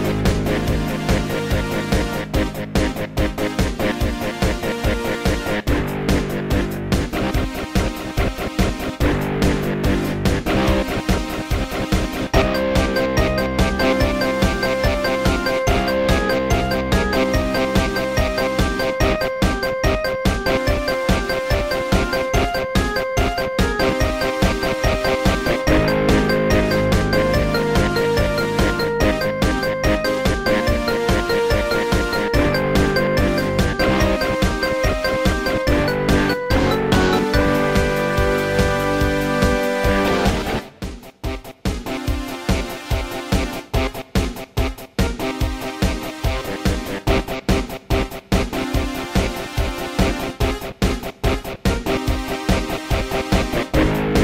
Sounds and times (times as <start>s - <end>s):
Techno: 0.0s - 54.2s.